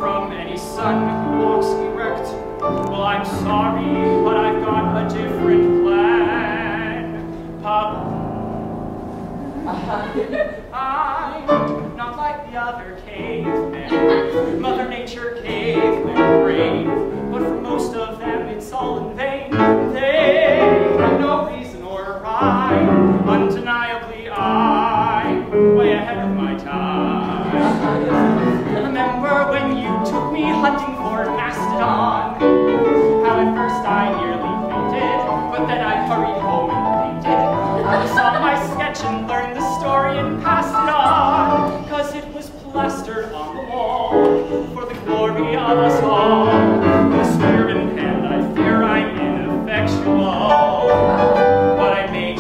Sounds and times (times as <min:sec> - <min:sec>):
Male singing: 0:00.0 - 0:08.5, 0:10.7 - 0:52.4
Music: 0:00.0 - 0:52.4.